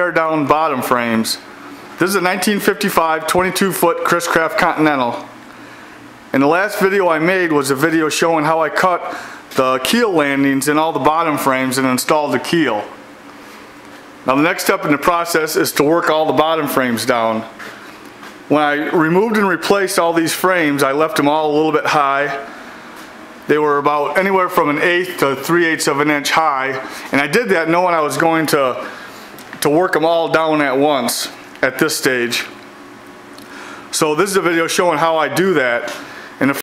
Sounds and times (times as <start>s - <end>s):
Speech: 0.0s - 5.4s, 6.3s - 13.0s, 14.3s - 17.6s, 18.5s - 22.5s, 23.5s - 29.0s, 29.6s - 32.6s, 33.9s - 36.6s.